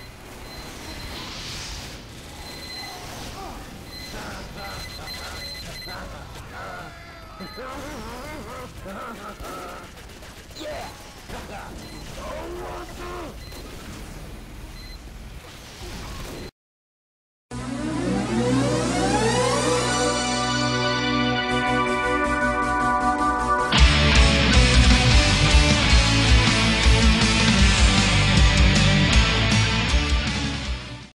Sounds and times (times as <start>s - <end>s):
Music: 17.5s - 31.1s.